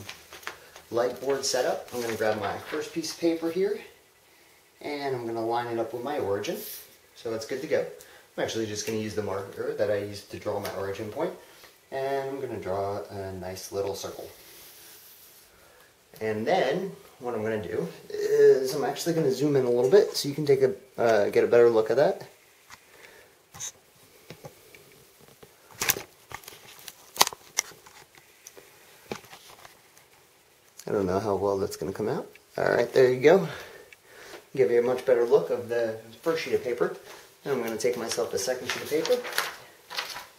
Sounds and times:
Crackle: 0.0 - 3.9, 22.7 - 31.0, 37.0 - 40.3.

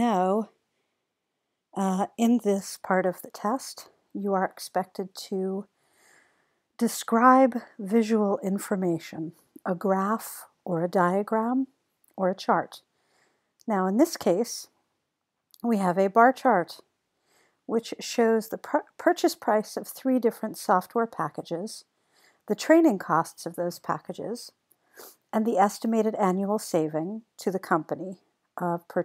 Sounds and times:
Speech: 0.0 - 0.6, 1.8 - 5.7, 6.8 - 12.8, 13.7 - 14.8, 15.6 - 16.9, 17.7 - 21.9, 22.5 - 24.6, 25.3 - 29.0.

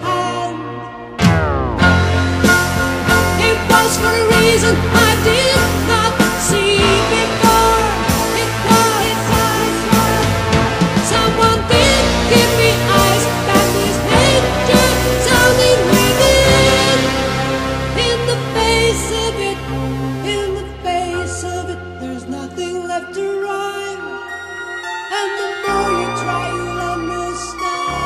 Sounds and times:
Music: 0.0 - 28.0.

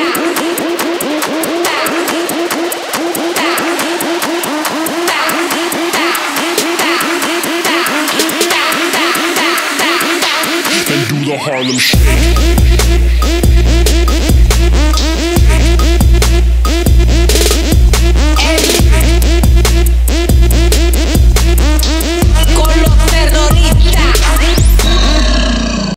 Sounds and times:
Disco: 0.0 - 25.2.

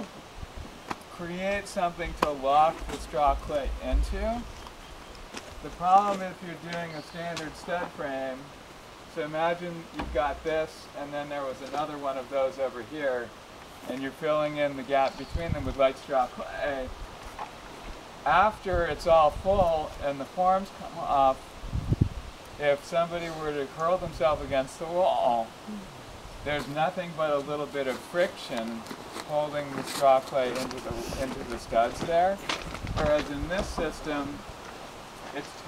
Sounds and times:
Outside, rural or natural: 0.0 - 35.6
Speech: 1.1 - 4.5, 5.6 - 8.5, 9.1 - 17.0, 18.3 - 21.4, 22.6 - 25.8, 26.5 - 34.4, 35.3 - 35.6.

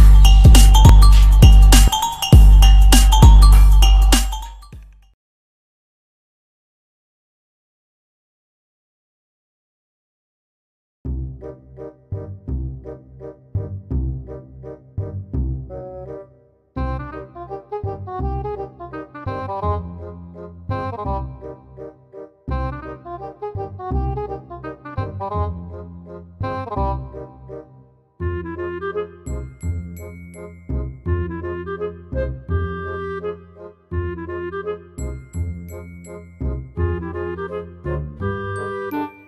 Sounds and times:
Music: 0.0 - 5.2, 11.1 - 39.2.

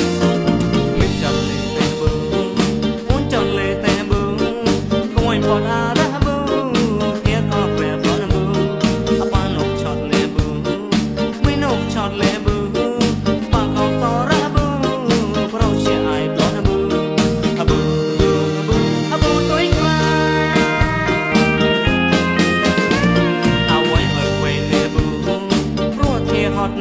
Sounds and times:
Funk: 0.0 - 26.8
Pop music: 0.0 - 26.8.

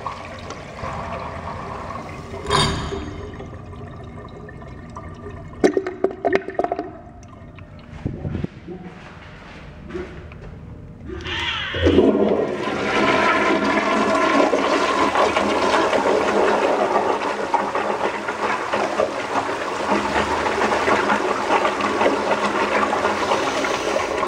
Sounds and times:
Toilet flush: 0.0 - 8.0, 11.2 - 24.2
Water: 0.0 - 8.8, 11.0 - 24.2.

